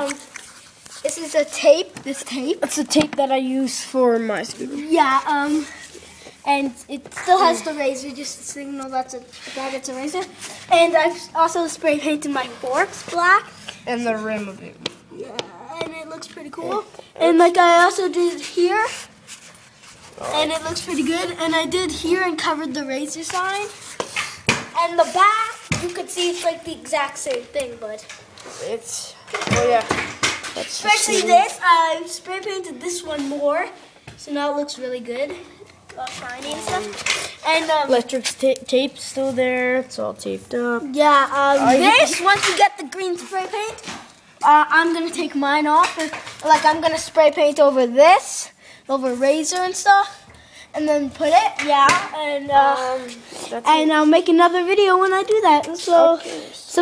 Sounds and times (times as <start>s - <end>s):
Speech: 6.5s - 19.0s, 30.6s - 35.4s.